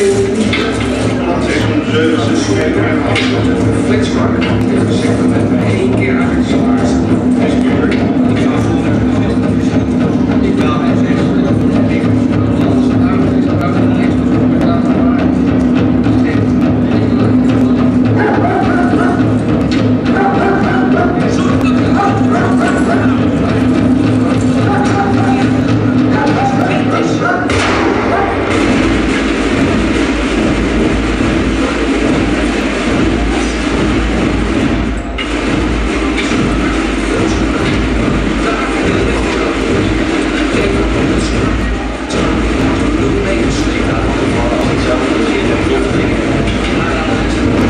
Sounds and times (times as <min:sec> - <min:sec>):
Speech: 0:00.0 - 0:47.7.